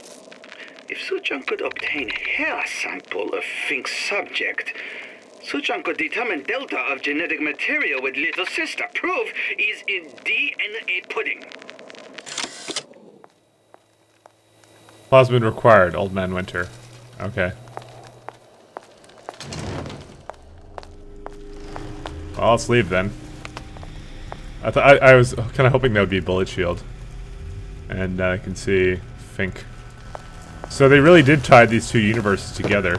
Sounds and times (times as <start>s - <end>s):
Speech: 0.9s - 4.8s, 5.4s - 11.5s, 15.1s - 17.6s, 22.4s - 23.2s, 24.6s - 26.8s, 27.9s - 29.7s, 30.7s - 32.9s.